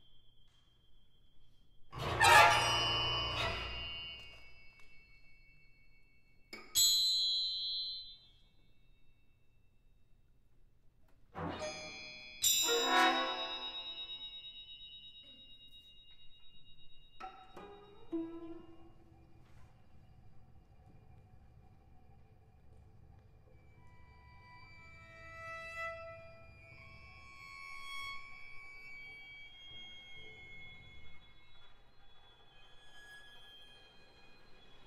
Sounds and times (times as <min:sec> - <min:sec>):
Percussion: 0:00.0 - 0:34.8
Bowed string instrument: 0:02.0 - 0:04.3, 0:11.4 - 0:13.9, 0:17.2 - 0:19.1, 0:23.6 - 0:31.2.